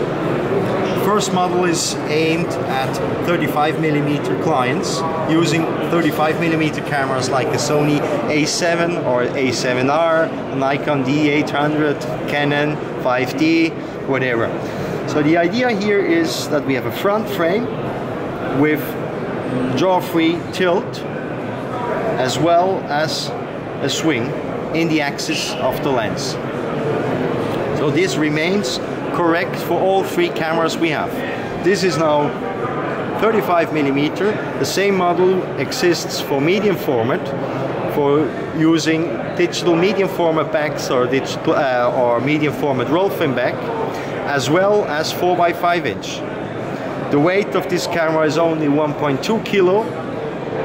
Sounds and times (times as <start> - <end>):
Speech: 0.6 - 17.8, 18.4 - 21.1, 21.7 - 26.4, 27.8 - 46.4, 47.0 - 50.0.